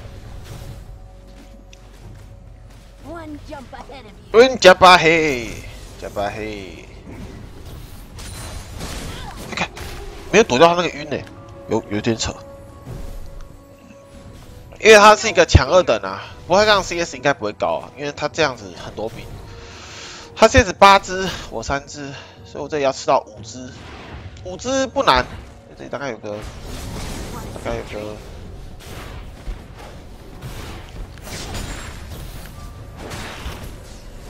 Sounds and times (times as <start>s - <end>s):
Music: 0.0s - 34.3s.